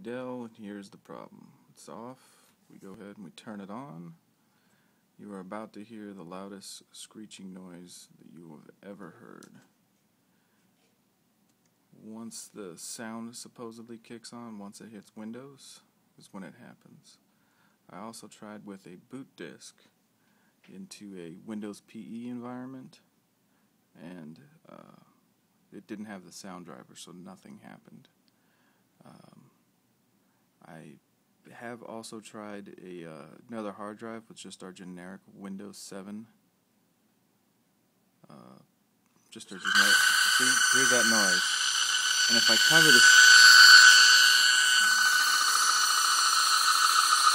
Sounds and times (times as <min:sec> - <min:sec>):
Speech: 0:00.0 - 0:04.2, 0:05.2 - 0:09.7, 0:12.0 - 0:17.2, 0:17.9 - 0:19.9, 0:20.7 - 0:23.1, 0:24.0 - 0:28.2, 0:29.0 - 0:29.5, 0:30.6 - 0:36.4, 0:38.2 - 0:38.7, 0:39.3 - 0:41.5, 0:42.3 - 0:43.1.